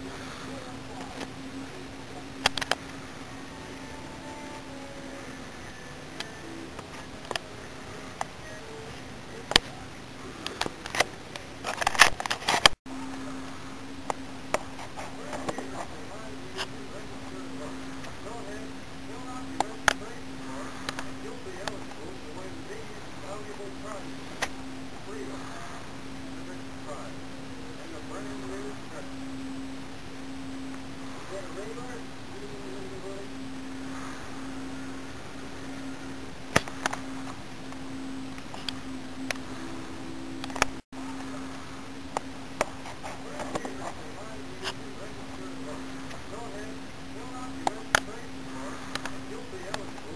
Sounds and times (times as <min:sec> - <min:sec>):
Speech: 0:00.0 - 0:02.4, 0:15.0 - 0:24.2, 0:25.0 - 0:29.2, 0:31.0 - 0:33.4, 0:43.0 - 0:50.1.